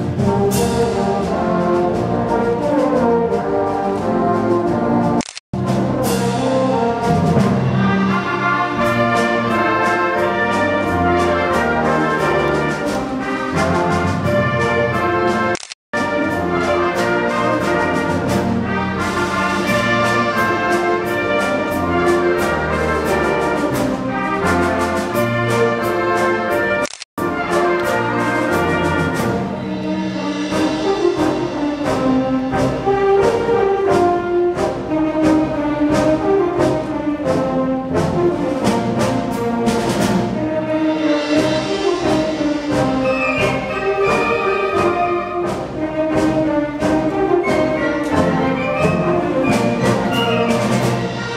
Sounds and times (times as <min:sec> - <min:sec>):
Orchestra: 0:00.0 - 0:51.3.